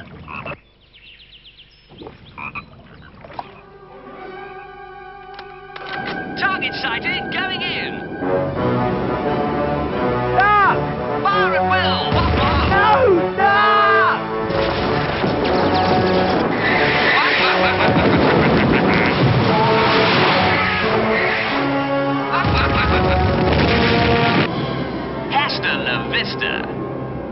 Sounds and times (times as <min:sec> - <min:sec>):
Music: 0:03.4 - 0:27.3.